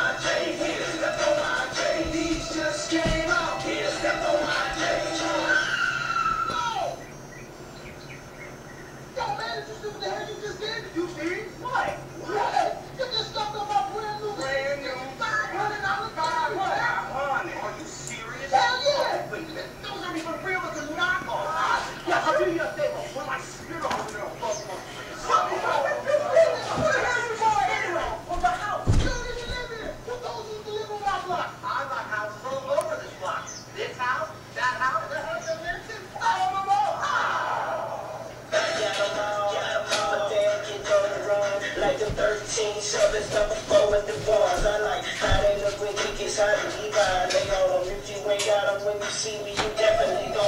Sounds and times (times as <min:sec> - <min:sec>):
Music: 0:00.0 - 0:06.1, 0:38.5 - 0:50.4
Speech: 0:09.2 - 0:37.5.